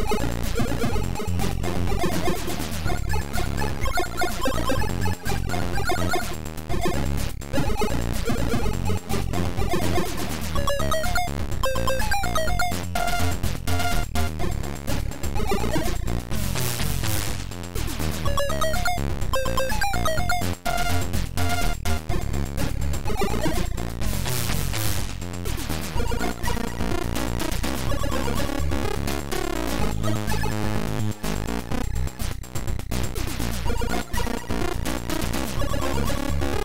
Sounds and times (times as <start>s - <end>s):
Music: 0.0s - 36.6s.